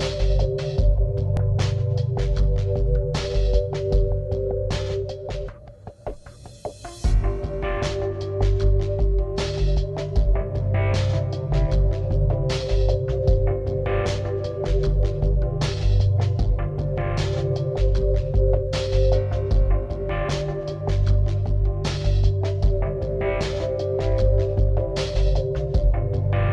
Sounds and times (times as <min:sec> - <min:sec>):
Music: 0:00.0 - 0:26.5.